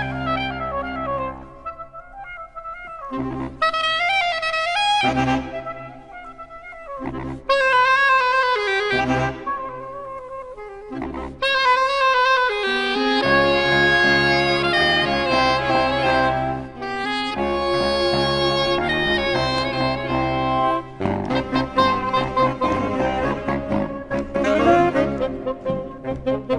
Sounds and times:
Music: 0.0s - 26.5s.

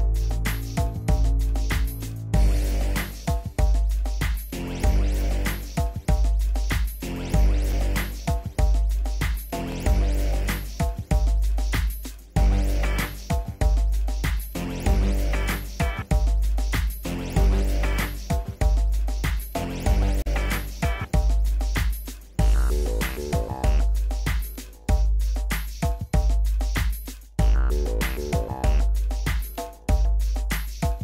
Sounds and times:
Music: 0.0s - 31.0s.

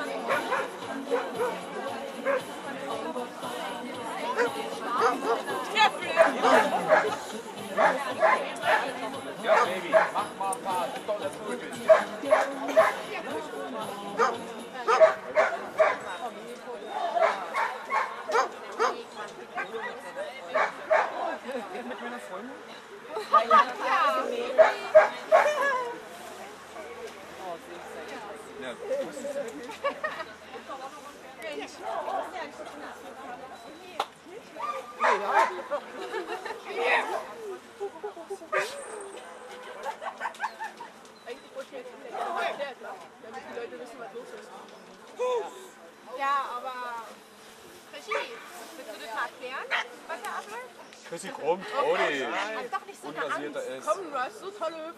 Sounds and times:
Music: 0.0s - 16.3s
Bow-wow: 6.2s - 7.2s, 7.8s - 8.9s, 14.2s - 16.1s, 17.2s - 19.0s, 24.6s - 25.7s.

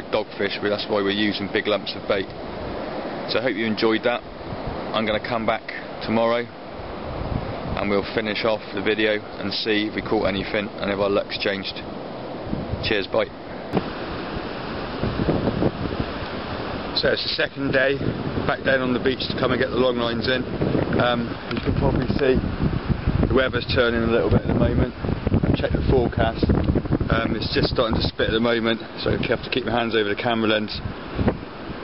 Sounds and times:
Waves, surf: 0.0s - 31.8s.

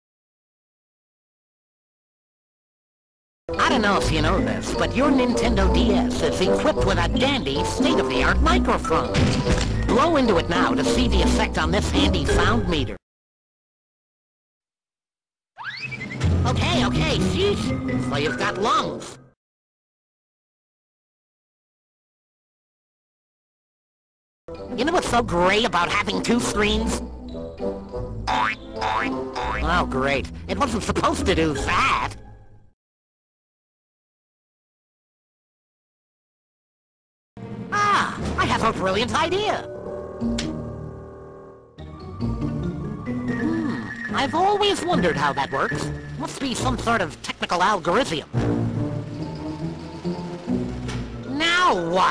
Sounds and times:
Speech: 3.5s - 9.2s, 9.9s - 13.0s, 16.4s - 19.2s, 24.7s - 27.0s, 29.6s - 32.2s, 37.7s - 39.7s, 43.5s - 48.4s, 51.3s - 52.1s
Music: 3.5s - 13.0s, 15.8s - 19.4s, 24.5s - 32.8s, 37.4s - 52.1s.

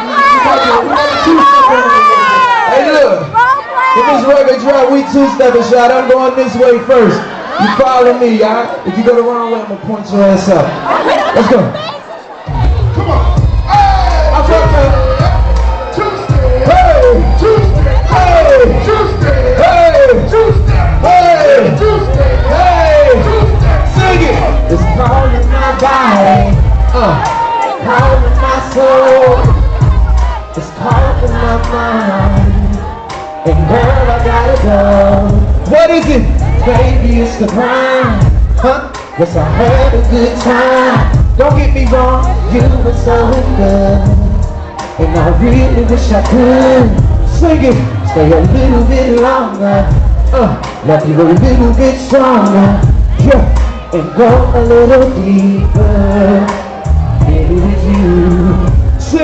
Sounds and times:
Music: 0.0s - 8.3s, 12.2s - 59.2s
Male singing: 13.1s - 59.2s.

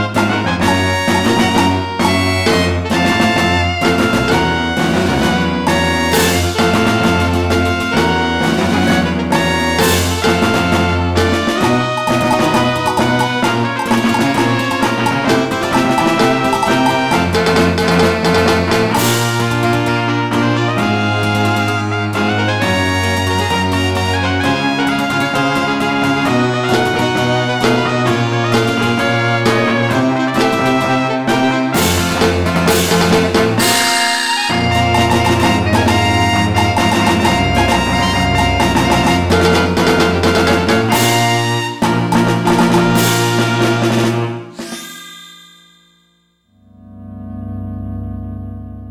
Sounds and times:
Music: 0.0s - 48.9s.

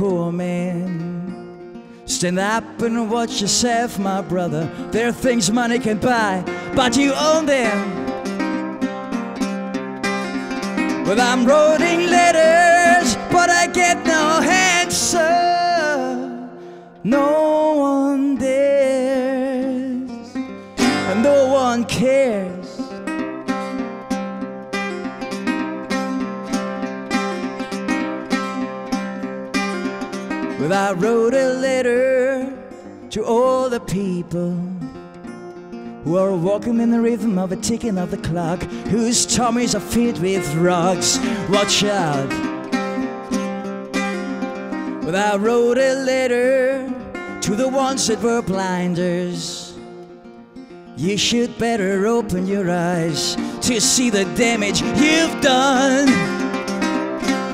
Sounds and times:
Music: 0.0s - 57.5s.

